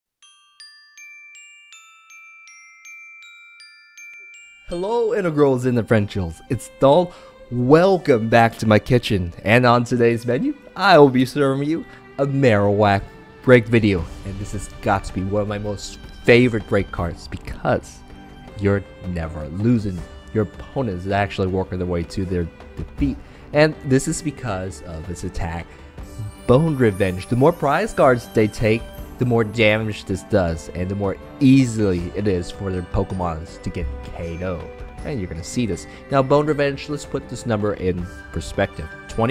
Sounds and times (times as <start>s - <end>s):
Marimba, xylophone: 0.2s - 6.6s, 25.7s - 39.3s
Glockenspiel: 0.2s - 7.9s, 13.6s - 22.4s, 23.0s - 39.3s.